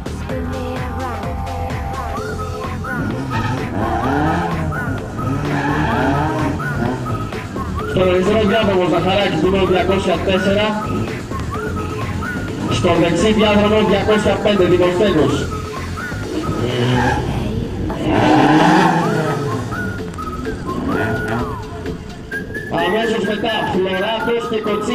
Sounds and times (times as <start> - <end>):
Race car, auto racing: 2.2 - 24.9.